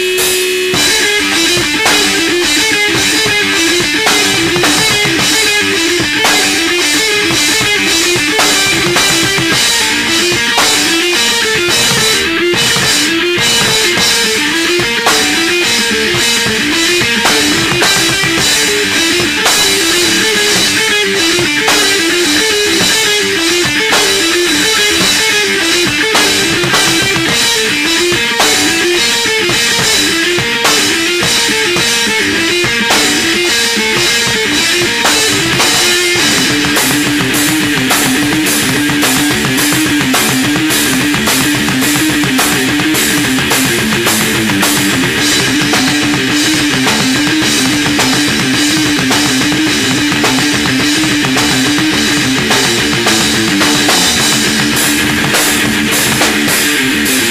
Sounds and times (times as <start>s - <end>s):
Music: 0.0s - 57.3s.